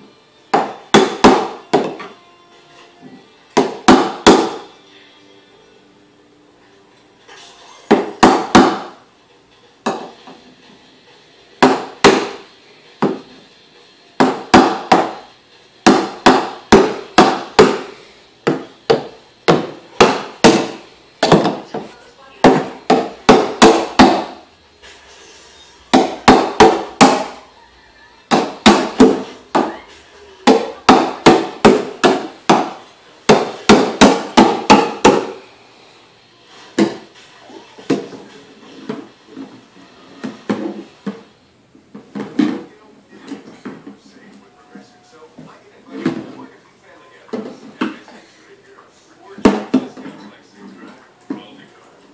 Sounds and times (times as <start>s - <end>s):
Music: 0.0s - 52.1s.